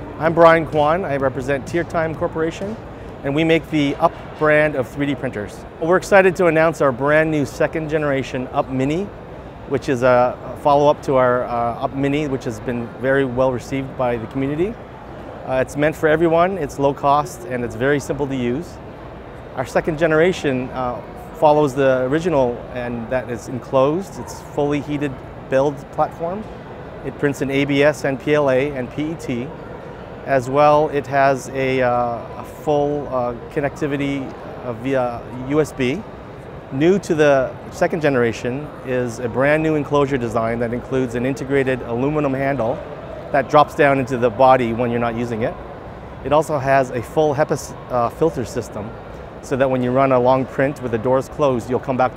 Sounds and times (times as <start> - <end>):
Speech: 0.2 - 9.1, 9.7 - 14.8, 15.5 - 18.8, 19.6 - 26.5, 27.1 - 29.5, 30.3 - 36.0, 36.7 - 42.8, 43.4 - 45.6, 46.2 - 52.1.